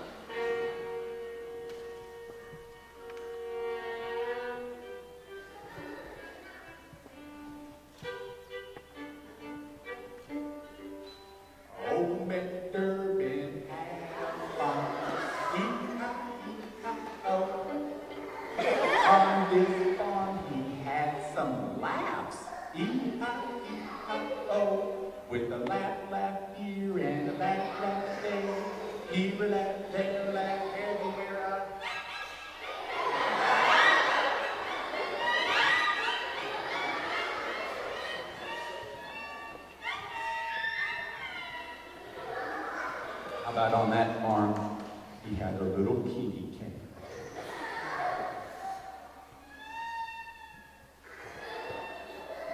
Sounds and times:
Violin, fiddle: 0.0 - 44.6, 48.0 - 52.5.

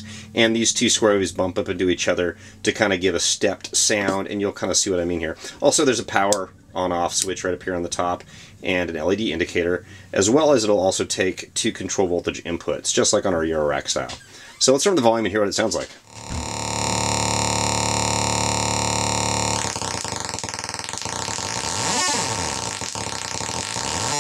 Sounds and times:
Speech: 0.0 - 16.0
Effects unit: 16.1 - 24.2.

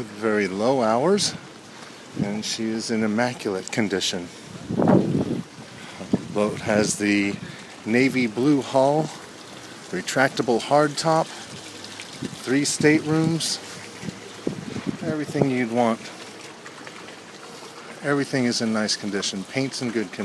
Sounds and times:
Speech: 0.0 - 1.4, 2.2 - 4.3, 6.4 - 9.2, 9.9 - 11.3, 12.4 - 13.6, 15.0 - 16.1, 18.0 - 20.2.

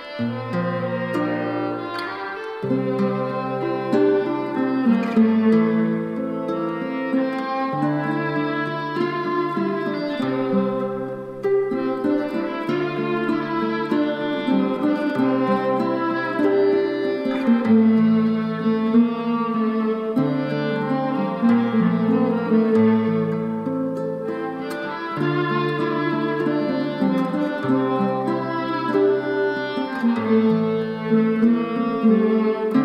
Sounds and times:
Music: 0.0 - 32.8.

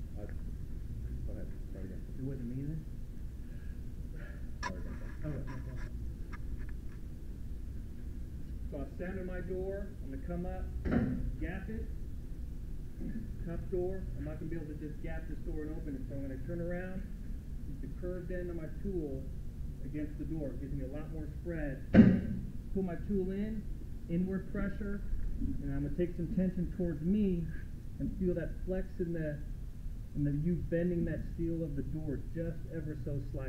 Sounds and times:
Speech: 0.2 - 0.4, 1.1 - 2.9, 4.6 - 5.9, 8.7 - 10.8, 11.4 - 11.9, 13.0 - 17.1, 17.7 - 21.9, 22.8 - 29.5, 30.2 - 33.4.

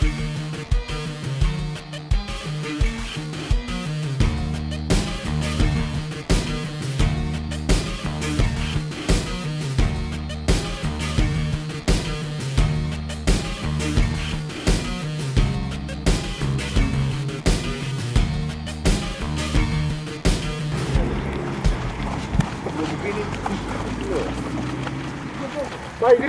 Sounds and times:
Music: 0.0 - 25.2
Outside, rural or natural: 18.2 - 26.2
Run: 20.7 - 26.2
Speech: 22.6 - 24.4, 25.4 - 26.2.

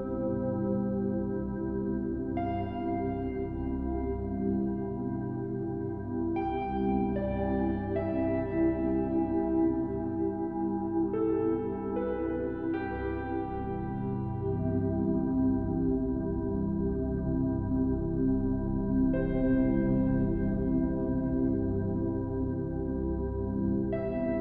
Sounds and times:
Ambient music: 0.0 - 24.4
New-age music: 0.0 - 24.4.

